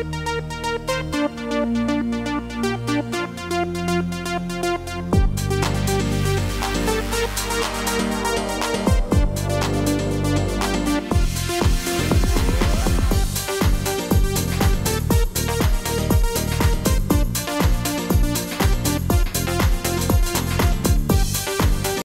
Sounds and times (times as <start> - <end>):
Music: 0.0 - 22.0.